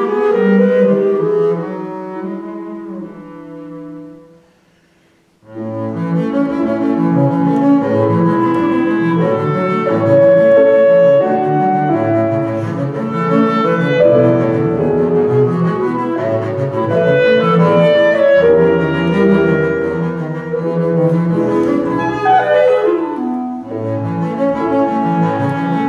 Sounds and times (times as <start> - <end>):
Keyboard (musical): 0.0 - 4.7, 5.4 - 25.8
Cello: 0.0 - 25.8
Clarinet: 0.0 - 25.8
Double bass: 5.5 - 25.8.